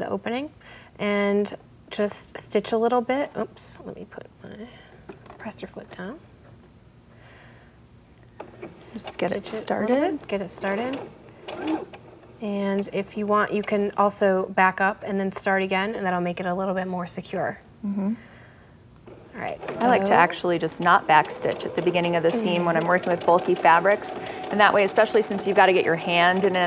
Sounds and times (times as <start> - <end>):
Sewing machine: 8.5 - 13.0, 19.1 - 26.6
Speech: 8.8 - 11.0, 19.4 - 26.6.